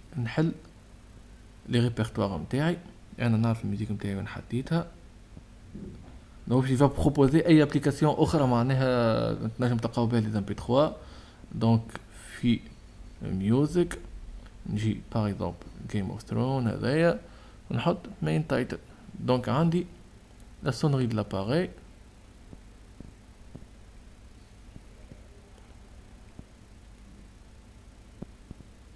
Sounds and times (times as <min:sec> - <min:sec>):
Speech: 0:00.1 - 0:00.7, 0:01.7 - 0:05.0, 0:06.5 - 0:11.0, 0:11.6 - 0:14.1, 0:14.7 - 0:20.0, 0:20.6 - 0:21.8.